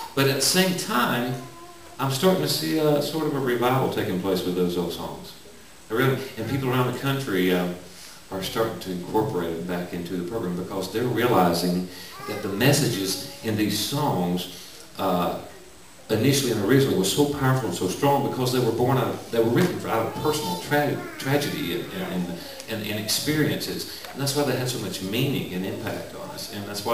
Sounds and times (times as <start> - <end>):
Speech: 0.0 - 26.9.